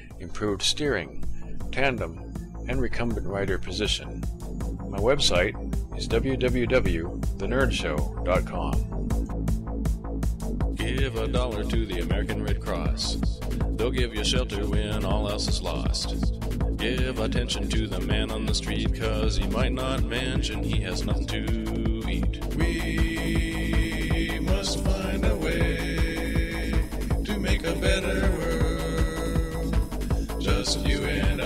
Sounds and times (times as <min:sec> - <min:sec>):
Music: 0:00.0 - 0:31.4
Speech: 0:00.2 - 0:04.2, 0:04.9 - 0:08.8, 0:10.8 - 0:16.2, 0:16.8 - 0:22.3.